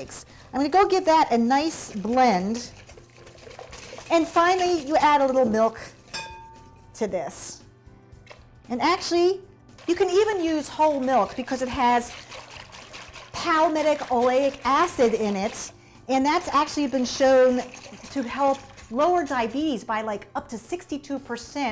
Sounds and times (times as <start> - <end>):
Music: 0.0 - 21.7
Speech: 13.4 - 21.7.